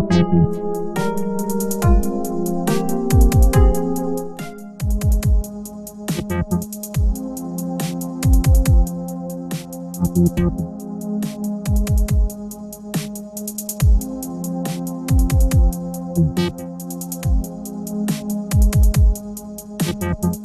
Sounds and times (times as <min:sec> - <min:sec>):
Dubstep: 0:00.0 - 0:20.4.